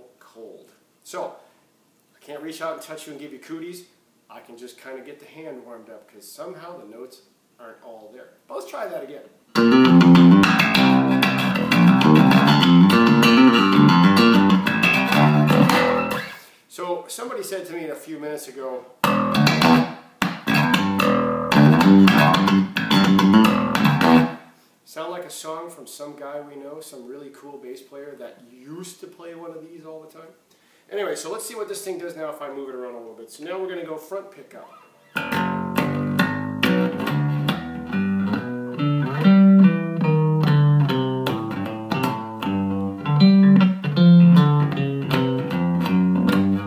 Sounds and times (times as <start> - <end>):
Inside, small room: 0.0 - 46.6
Guitar: 9.5 - 16.6, 19.0 - 24.5, 34.6 - 46.6.